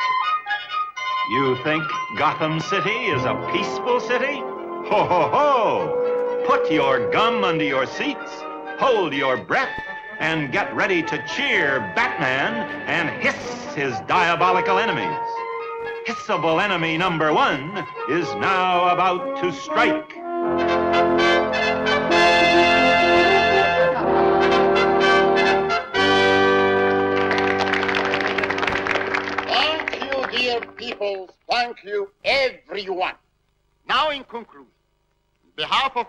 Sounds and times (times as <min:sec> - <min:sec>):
Music: 0:00.0 - 0:31.3
Narration, monologue: 0:01.3 - 0:04.8, 0:05.6 - 0:20.4, 0:29.5 - 0:36.0.